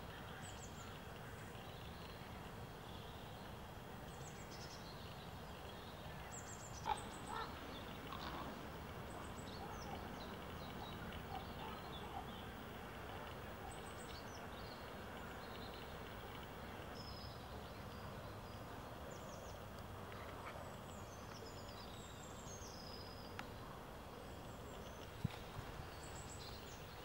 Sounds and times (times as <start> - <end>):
Bird: 4.1 - 23.6.